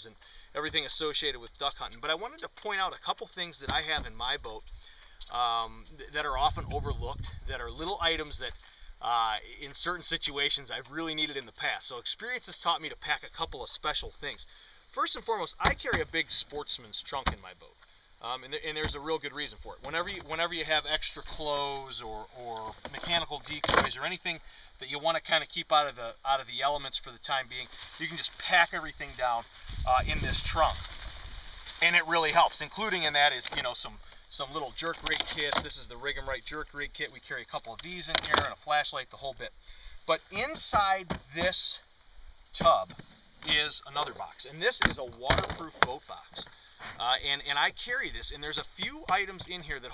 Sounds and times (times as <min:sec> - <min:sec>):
Speech: 0:00.0 - 0:04.6, 0:05.3 - 0:30.8, 0:31.8 - 0:41.9, 0:42.6 - 0:49.9.